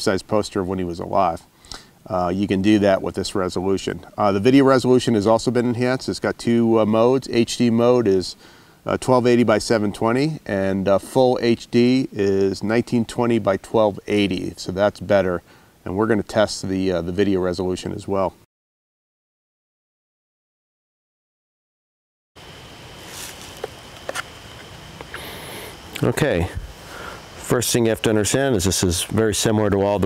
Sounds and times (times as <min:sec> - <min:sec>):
Speech: 0:00.0 - 0:01.4, 0:02.1 - 0:18.5, 0:26.0 - 0:26.6, 0:27.4 - 0:30.0.